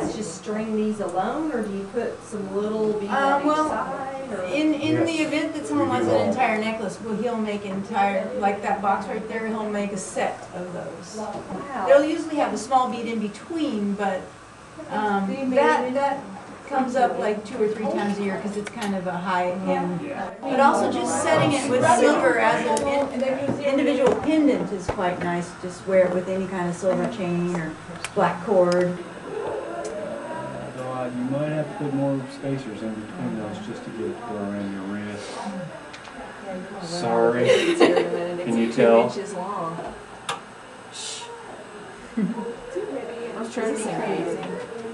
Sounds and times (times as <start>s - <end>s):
Female speech, woman speaking: 0.0s - 29.0s, 35.4s - 40.0s, 41.0s - 41.5s, 42.6s - 44.9s.